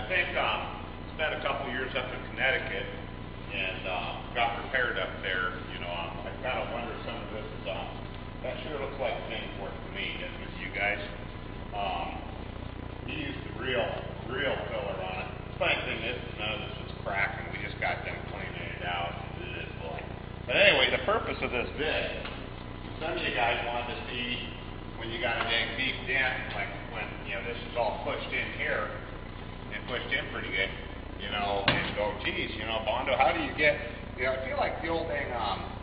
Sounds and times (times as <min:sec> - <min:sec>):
Speech: 0:00.0 - 0:12.4, 0:13.1 - 0:22.3, 0:23.0 - 0:29.1, 0:29.7 - 0:35.8.